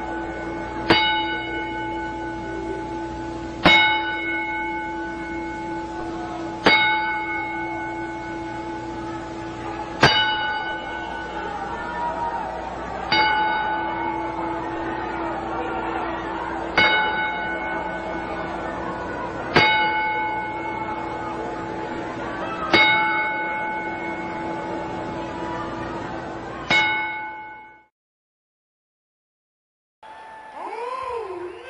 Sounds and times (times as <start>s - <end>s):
Speech: 30.6s - 31.7s.